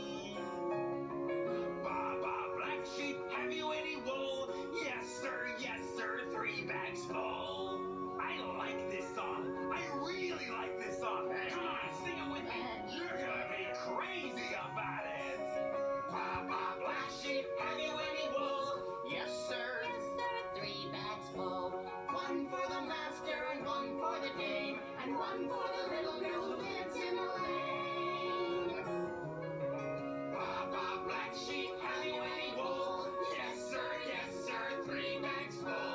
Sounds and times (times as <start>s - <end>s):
Music: 0.0s - 35.9s
Speech: 1.9s - 15.6s, 16.2s - 21.5s, 22.1s - 27.1s.